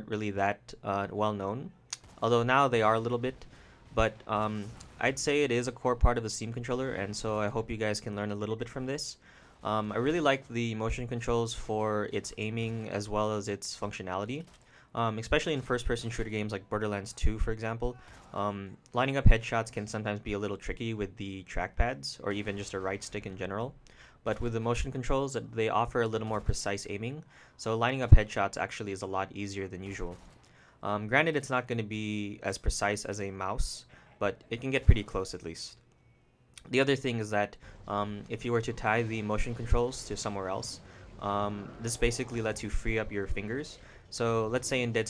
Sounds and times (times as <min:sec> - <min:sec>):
Speech: 0:00.0 - 0:03.4, 0:04.0 - 0:30.2, 0:30.8 - 0:35.8, 0:36.6 - 0:45.1.